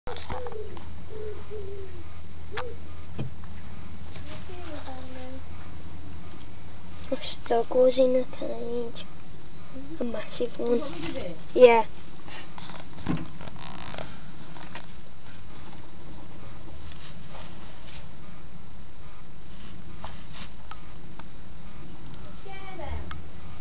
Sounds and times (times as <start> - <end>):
Animal: 0.1 - 3.0.